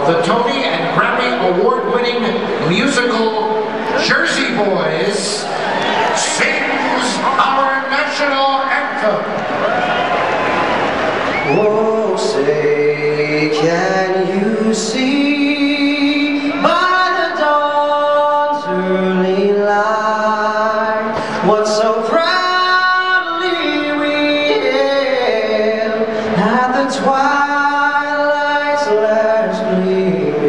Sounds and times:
Male singing: 11.4s - 30.4s.

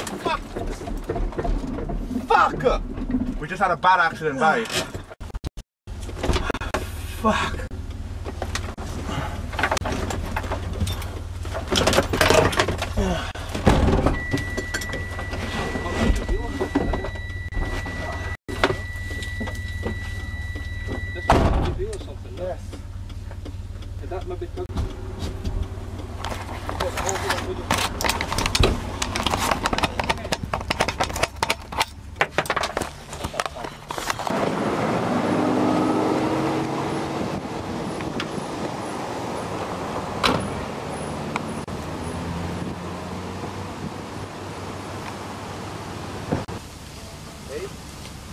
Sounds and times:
Car: 0.0s - 48.3s
Outside, rural or natural: 0.0s - 48.3s.

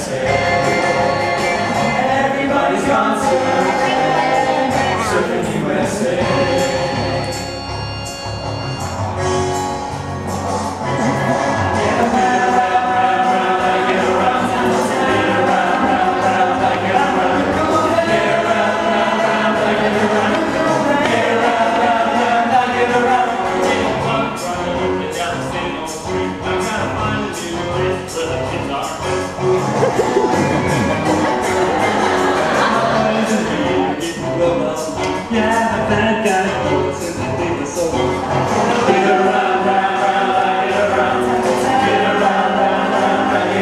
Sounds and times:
Choir: 0.0s - 7.7s, 11.0s - 27.7s, 29.9s - 43.6s
Crowd: 0.0s - 43.6s
Rock music: 0.0s - 43.6s.

